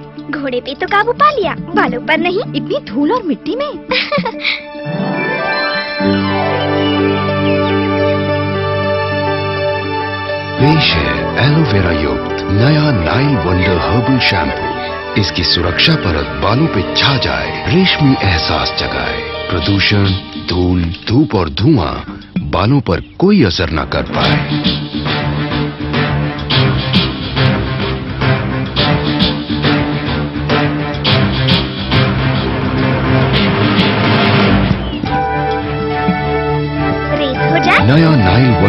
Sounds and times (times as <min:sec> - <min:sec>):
Music: 0:00.0 - 0:38.6.